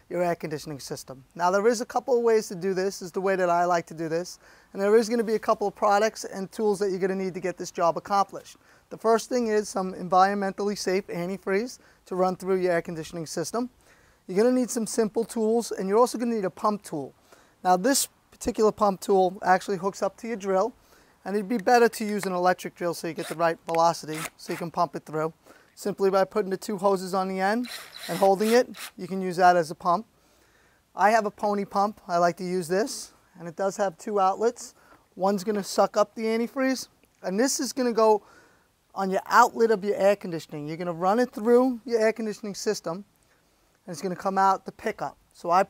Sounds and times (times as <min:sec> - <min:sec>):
Speech: 0:00.1 - 0:13.7, 0:14.3 - 0:30.1, 0:31.0 - 0:38.2, 0:38.9 - 0:43.1, 0:43.8 - 0:45.7.